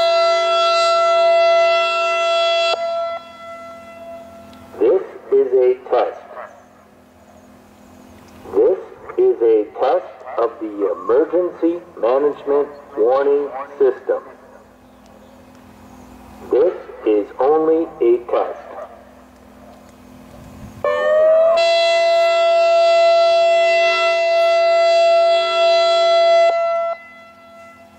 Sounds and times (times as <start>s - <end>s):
Speech: 4.8s - 6.4s, 8.5s - 14.4s, 16.5s - 18.9s.